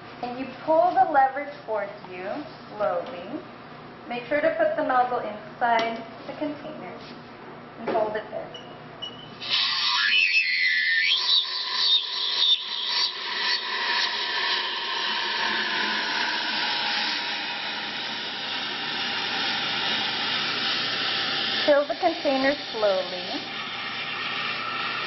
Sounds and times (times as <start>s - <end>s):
Speech: 0.2s - 3.5s, 4.1s - 7.1s, 7.8s - 8.6s, 21.7s - 23.5s.